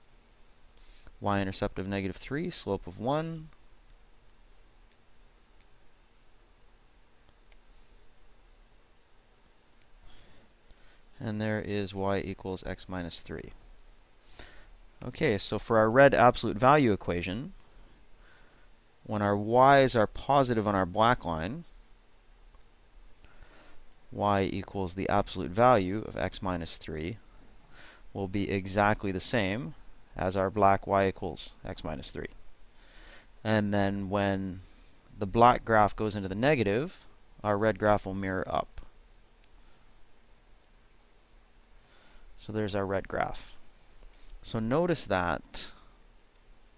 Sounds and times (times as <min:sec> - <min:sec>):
Speech: 0:01.2 - 0:03.6, 0:11.2 - 0:13.6, 0:15.0 - 0:17.6, 0:19.1 - 0:21.7, 0:24.1 - 0:27.2, 0:28.2 - 0:32.4, 0:33.4 - 0:34.6, 0:35.2 - 0:38.9, 0:42.4 - 0:43.6, 0:44.4 - 0:45.8.